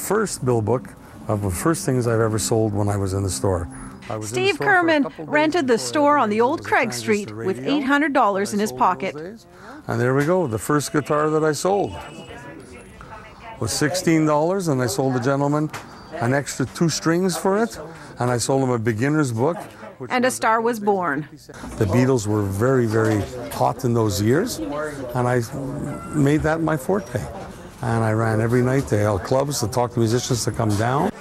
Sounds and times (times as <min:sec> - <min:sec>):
Music: 0:00.0 - 0:07.3.